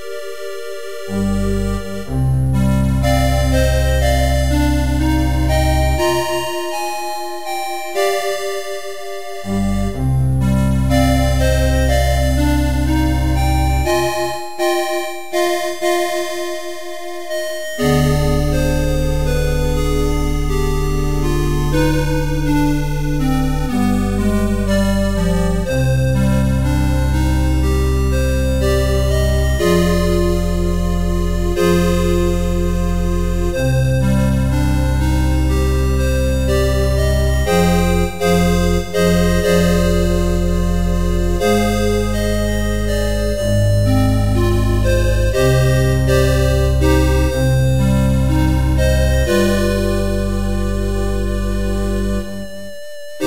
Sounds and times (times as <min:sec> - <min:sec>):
Music: 0:00.0 - 0:53.2.